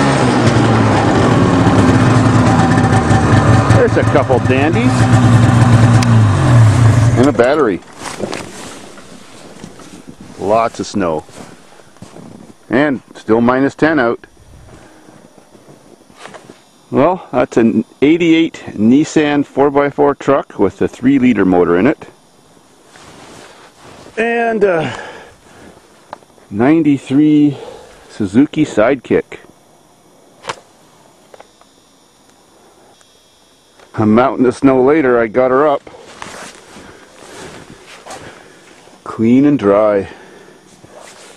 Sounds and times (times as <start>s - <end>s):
Vehicle: 0.0s - 11.4s
Speech: 3.7s - 5.0s, 7.2s - 7.8s, 10.4s - 11.3s, 12.7s - 14.3s, 16.9s - 22.2s, 24.2s - 25.0s, 26.5s - 29.5s, 33.9s - 35.9s, 39.0s - 40.2s.